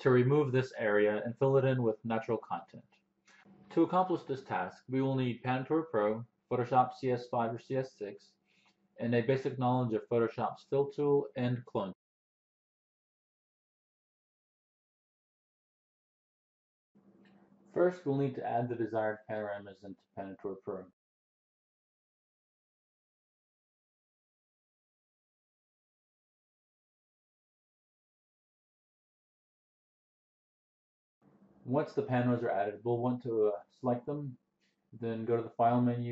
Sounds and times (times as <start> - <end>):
Speech: 0.0 - 2.8, 3.8 - 8.3, 9.0 - 12.0, 17.8 - 21.0, 31.7 - 34.4, 35.0 - 36.1.